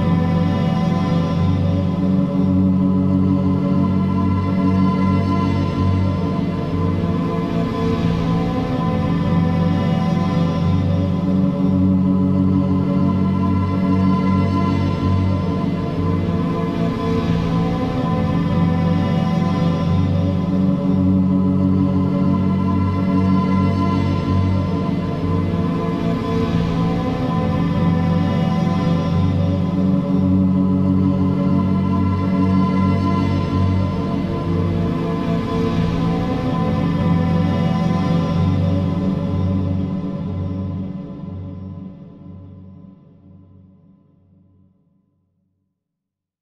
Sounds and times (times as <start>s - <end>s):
Music: 0.0s - 46.4s.